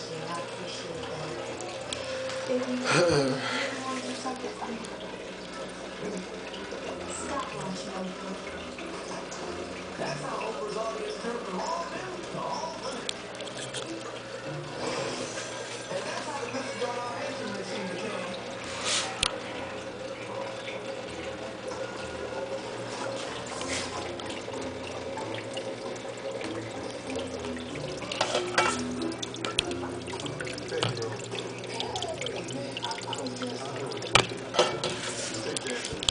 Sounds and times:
Speech: 0:00.0 - 0:01.7, 0:02.5 - 0:05.0, 0:07.0 - 0:08.6, 0:10.0 - 0:13.9, 0:15.9 - 0:18.4, 0:30.5 - 0:34.1, 0:35.2 - 0:36.1.

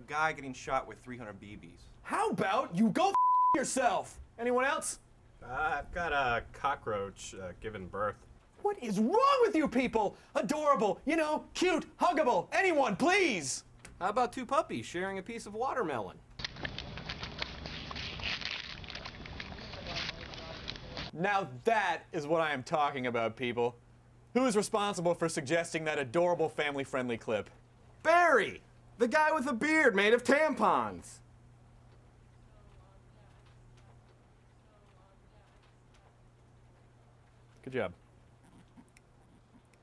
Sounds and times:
Speech: 0:00.0 - 0:16.2, 0:19.8 - 0:23.8, 0:24.4 - 0:31.2, 0:37.6 - 0:38.0.

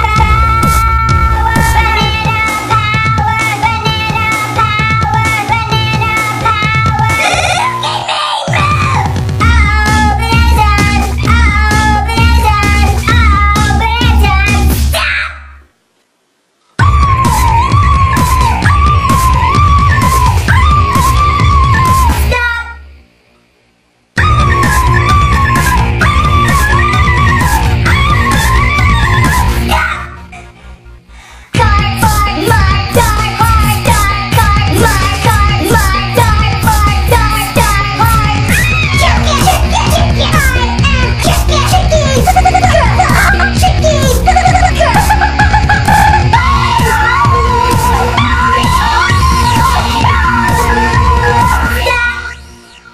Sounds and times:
Music: 0:00.0 - 0:15.0, 0:16.8 - 0:52.9.

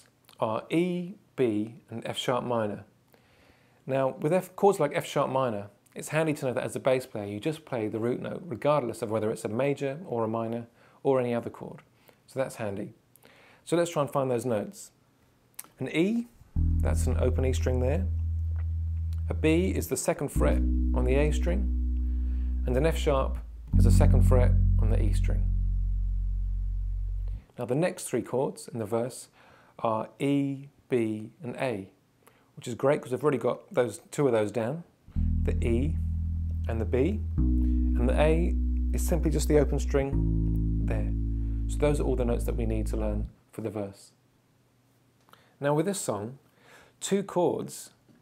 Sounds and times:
Speech: 0:00.0 - 0:02.9, 0:03.9 - 0:13.0, 0:13.6 - 0:15.0, 0:15.6 - 0:18.1, 0:19.3 - 0:21.7, 0:22.6 - 0:25.5, 0:27.6 - 0:32.0, 0:32.6 - 0:36.0, 0:36.7 - 0:37.2, 0:38.0 - 0:40.2, 0:40.9 - 0:41.1, 0:41.7 - 0:44.2, 0:45.6 - 0:46.4, 0:47.0 - 0:48.0.

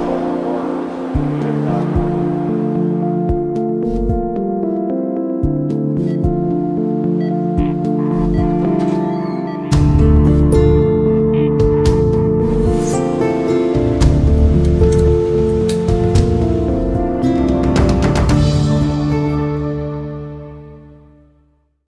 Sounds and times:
Music: 0:00.0 - 0:21.9.

